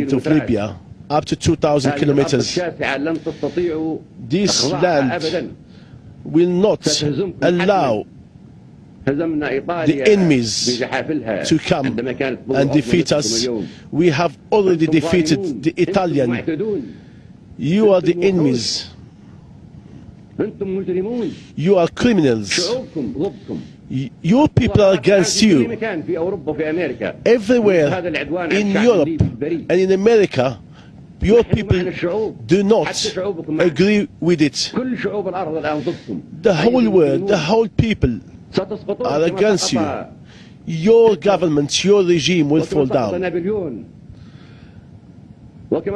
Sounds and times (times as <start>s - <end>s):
Male speech, man speaking: 0.0s - 5.6s, 6.3s - 8.1s, 9.0s - 16.9s, 17.6s - 19.0s, 20.4s - 30.6s, 31.2s - 43.9s, 45.7s - 45.9s
Conversation: 0.0s - 45.9s.